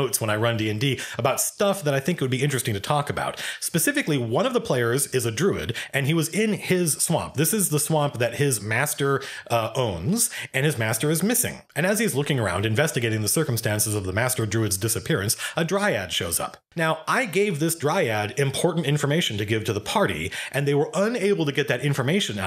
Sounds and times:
Inside, small room: 0:00.0 - 0:22.4
Speech: 0:00.0 - 0:22.4.

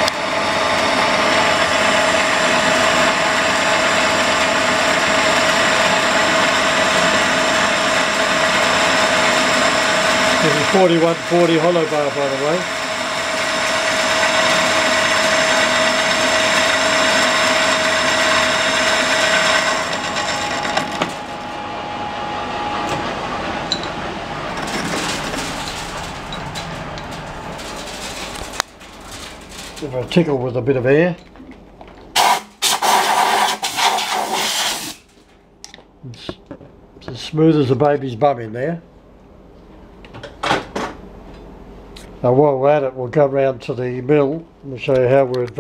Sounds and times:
Speech: 0:10.4 - 0:12.7, 0:29.8 - 0:31.2, 0:36.1 - 0:36.4, 0:37.0 - 0:38.9, 0:42.2 - 0:45.6.

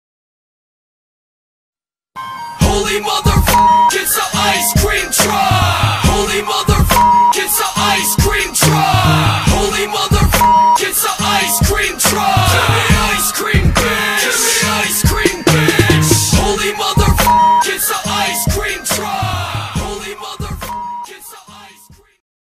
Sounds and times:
Music: 0:02.2 - 0:22.2.

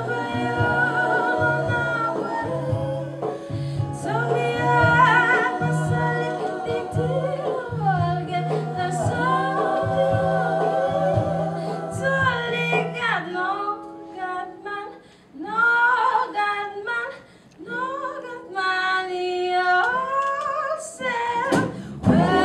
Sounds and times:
Singing: 0:00.0 - 0:13.0, 0:17.8 - 0:22.4
Inside, large room or hall: 0:00.0 - 0:22.4
Music: 0:00.0 - 0:22.4.

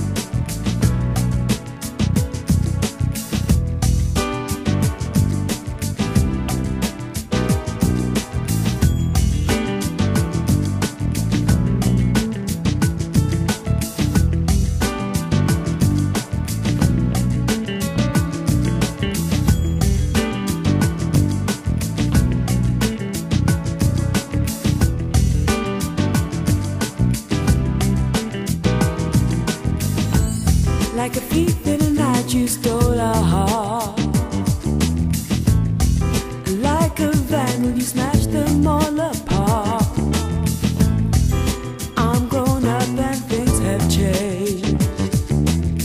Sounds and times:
Music: 0:00.0 - 0:45.8.

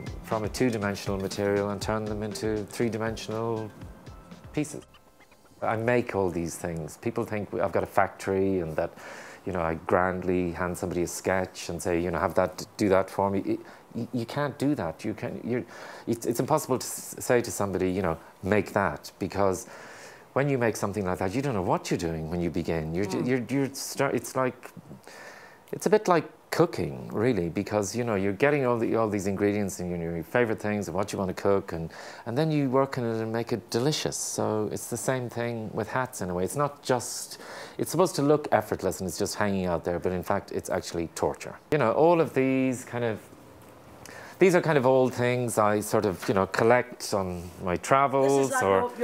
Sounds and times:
Speech: 0:00.3 - 0:03.7, 0:04.6 - 0:04.9, 0:05.6 - 0:19.7, 0:20.4 - 0:24.9, 0:25.7 - 0:43.3, 0:44.4 - 0:49.0.

